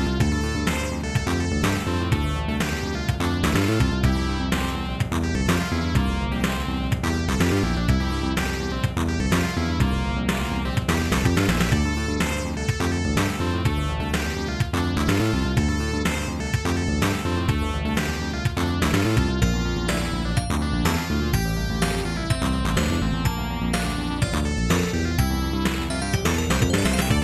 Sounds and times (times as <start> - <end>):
Music: 0.0 - 27.2.